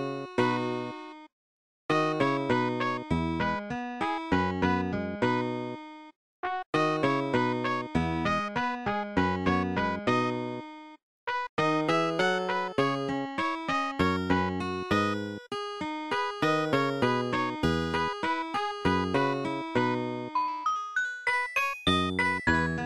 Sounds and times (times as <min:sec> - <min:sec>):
Music: 0:00.0 - 0:01.3, 0:01.9 - 0:22.8.